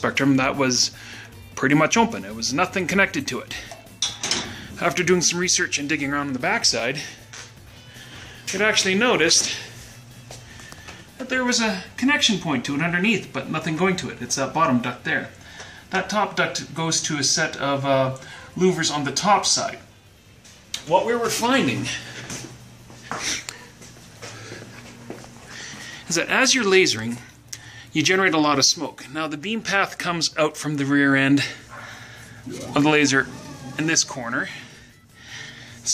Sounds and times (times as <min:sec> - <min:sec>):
Speech: 0:00.0 - 0:01.0, 0:01.6 - 0:03.6, 0:04.8 - 0:07.1, 0:08.5 - 0:09.6, 0:11.2 - 0:19.9, 0:20.8 - 0:22.0, 0:26.1 - 0:27.3, 0:28.0 - 0:31.6, 0:32.5 - 0:34.6
Music: 0:00.0 - 0:35.9.